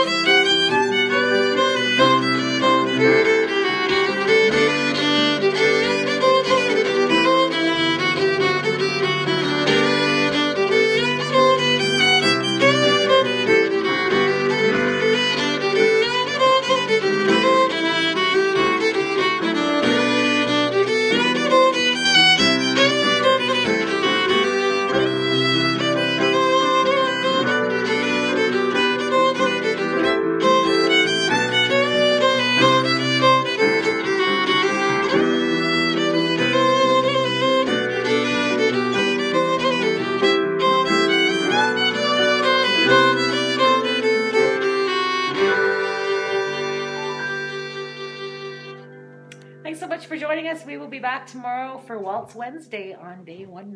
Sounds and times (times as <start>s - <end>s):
Violin, fiddle: 0.0s - 49.4s
Classical music: 0.0s - 53.7s.